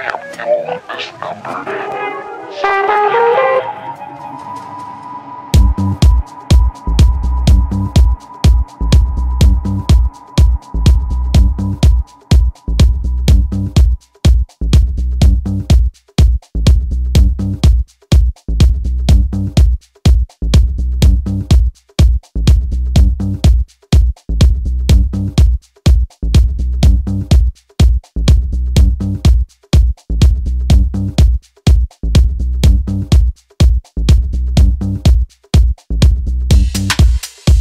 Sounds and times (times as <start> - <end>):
Music: 2.4 - 37.6.